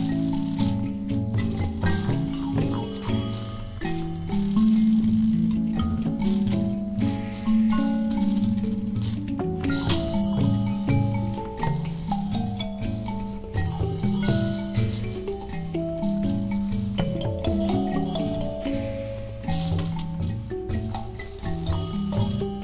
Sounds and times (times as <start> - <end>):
Music: 0.0 - 22.6.